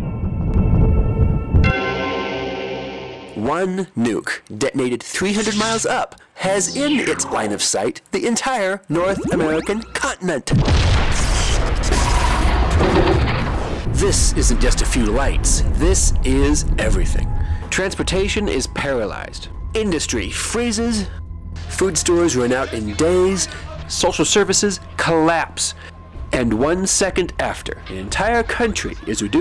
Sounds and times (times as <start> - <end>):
Speech: 3.4 - 10.5, 14.0 - 29.4
Boom: 10.5 - 17.3.